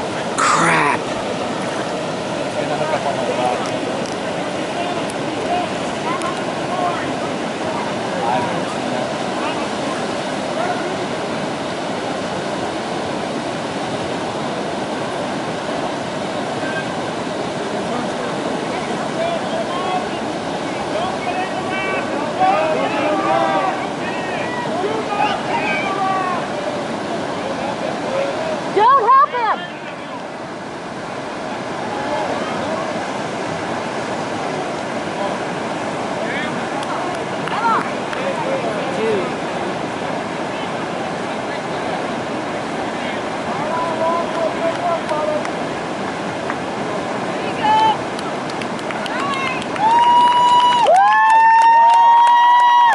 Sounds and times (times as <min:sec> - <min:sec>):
Outside, rural or natural: 0:00.0 - 0:52.9.